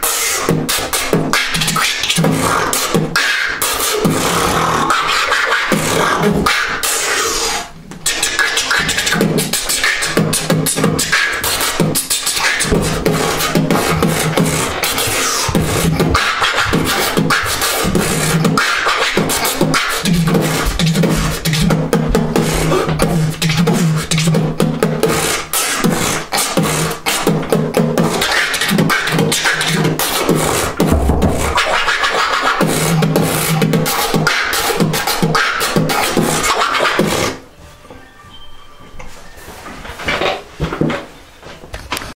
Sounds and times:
Beatboxing: 0.0 - 37.4.

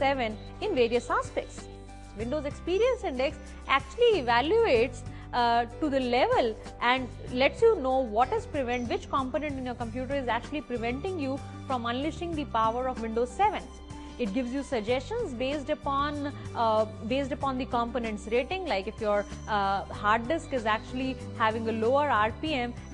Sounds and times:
Speech: 0.0 - 1.6, 2.2 - 22.8
Music: 0.0 - 22.9.

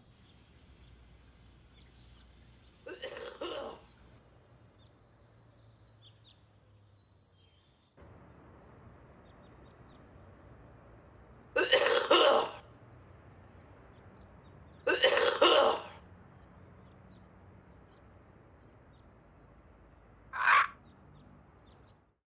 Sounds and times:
Throat clearing: 2.9 - 3.8, 11.6 - 12.6, 14.9 - 16.0.

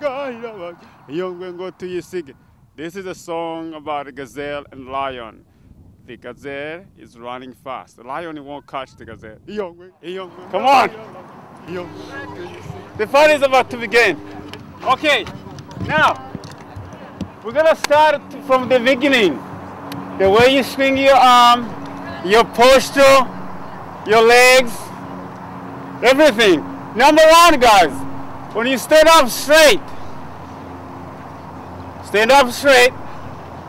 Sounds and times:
Speech: 0.0 - 5.4, 6.1 - 19.4, 20.2 - 24.9, 26.0 - 28.0, 28.6 - 29.8, 32.0 - 33.0
Outside, urban or manmade: 0.0 - 33.6.

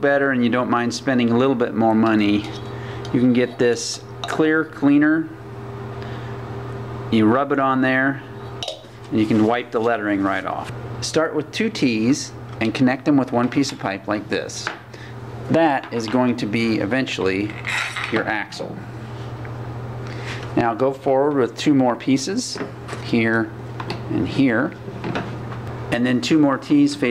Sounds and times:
Speech: 0.0 - 5.4, 7.1 - 8.3, 9.1 - 14.8, 15.5 - 18.8, 20.6 - 24.8, 25.9 - 27.1.

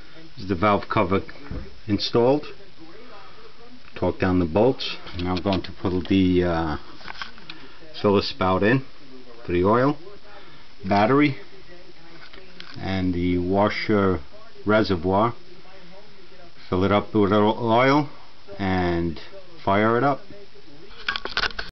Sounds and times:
Speech: 0.0 - 21.2.

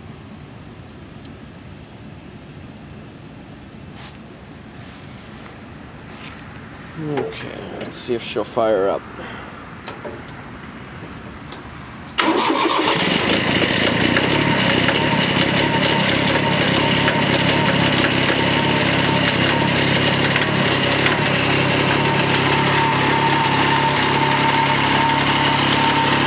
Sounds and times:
Outside, urban or manmade: 0.0 - 26.2
Vehicle: 0.0 - 26.2.

